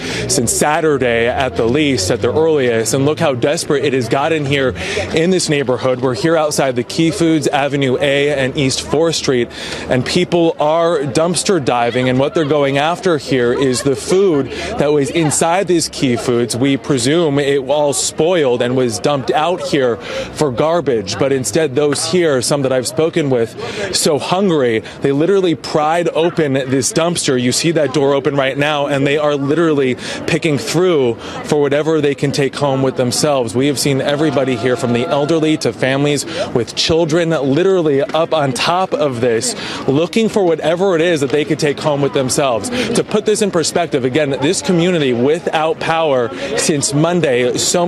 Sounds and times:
Speech: 0.0s - 47.8s.

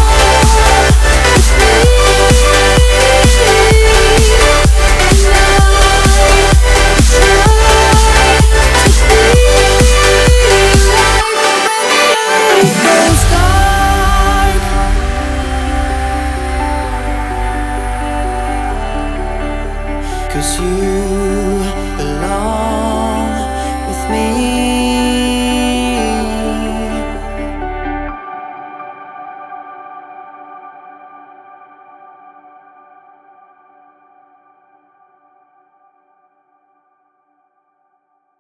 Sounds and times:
Ambient music: 0.0s - 35.4s.

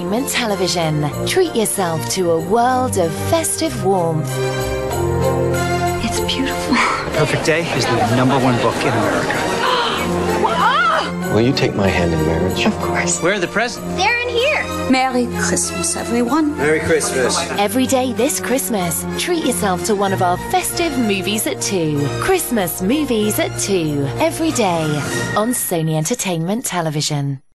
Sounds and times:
Music: 0.0s - 27.5s.

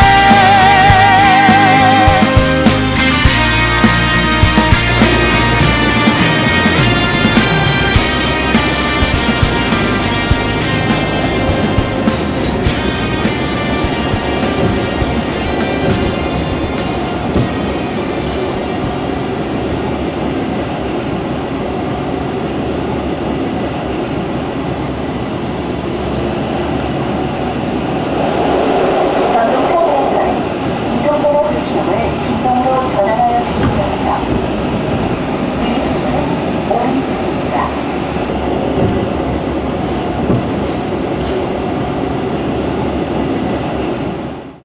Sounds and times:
Railroad car, train wagon: 0.0s - 44.6s
Train: 0.0s - 44.6s
Clickety-clack: 11.8s - 21.3s, 38.7s - 41.5s.

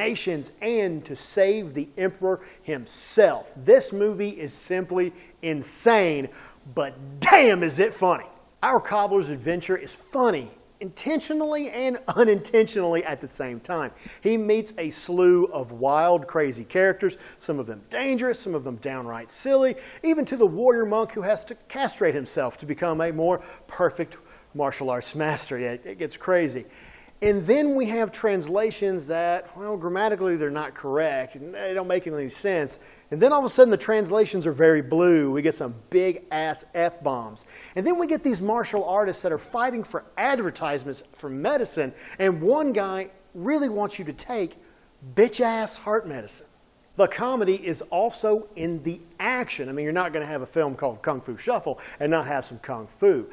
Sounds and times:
Speech: 0.0s - 53.3s.

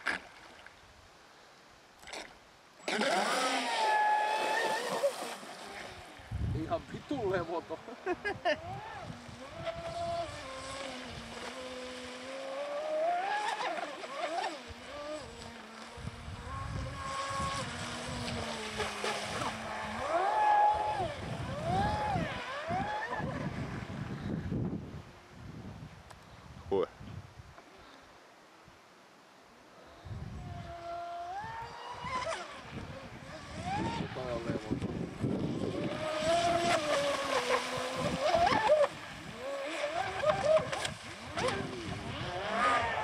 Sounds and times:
Motorboat, speedboat: 0.0s - 0.9s, 1.9s - 25.3s, 29.7s - 43.0s
Wind noise (microphone): 5.8s - 7.5s, 8.2s - 11.5s, 14.8s - 27.6s, 30.0s - 43.0s.

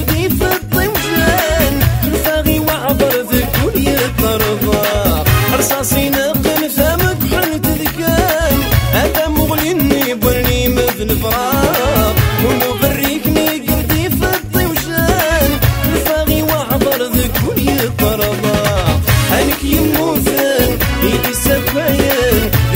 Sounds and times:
Rhythm and blues: 0.0s - 22.7s.

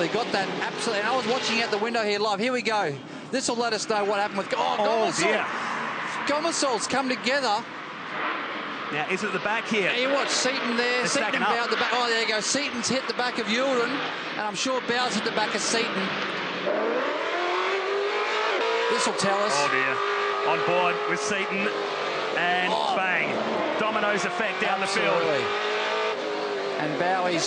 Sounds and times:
Speech: 9.0s - 16.1s, 18.9s - 21.7s, 26.8s - 27.4s.

